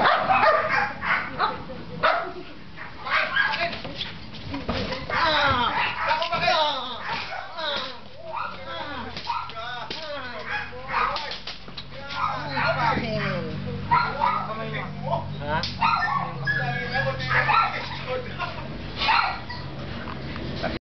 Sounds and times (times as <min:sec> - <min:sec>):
Yip: 0:00.0 - 0:03.6, 0:05.8 - 0:06.3, 0:07.0 - 0:07.5, 0:09.3 - 0:09.6, 0:10.5 - 0:11.3, 0:12.2 - 0:14.5, 0:15.8 - 0:18.0, 0:19.0 - 0:19.7
Speech: 0:04.9 - 0:18.7.